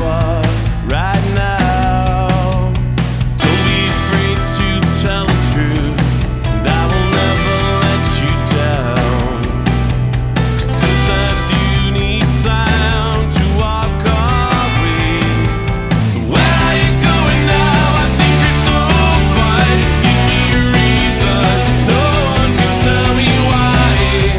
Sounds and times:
Music: 0:00.0 - 0:24.3.

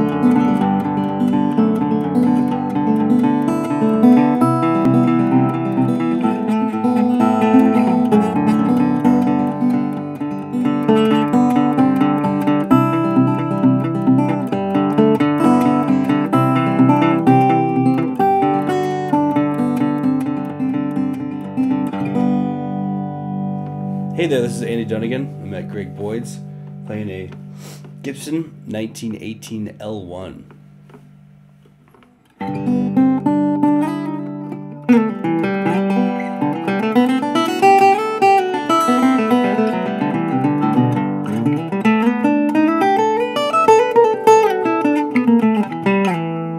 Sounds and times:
Acoustic guitar: 0:00.0 - 0:46.5
Speech: 0:24.2 - 0:27.4, 0:28.0 - 0:30.5.

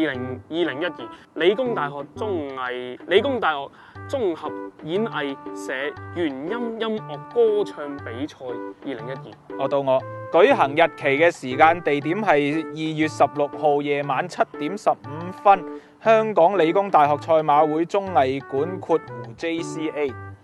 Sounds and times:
Speech: 0:00.0 - 0:20.1
Music: 0:00.0 - 0:20.4.

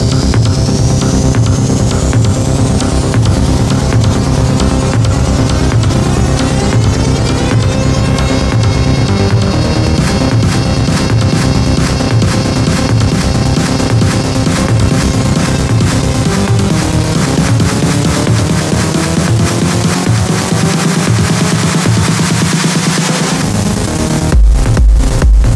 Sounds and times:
Music: 0:00.0 - 0:25.5.

